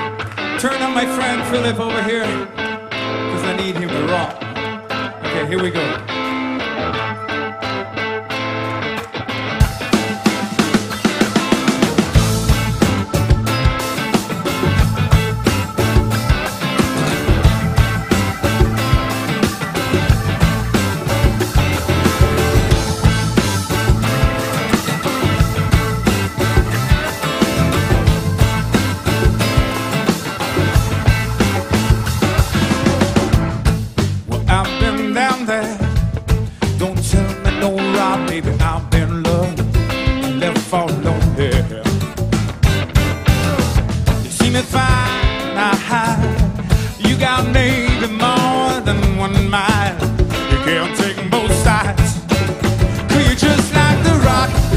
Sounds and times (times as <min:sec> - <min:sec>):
Rock music: 0:00.0 - 0:54.7.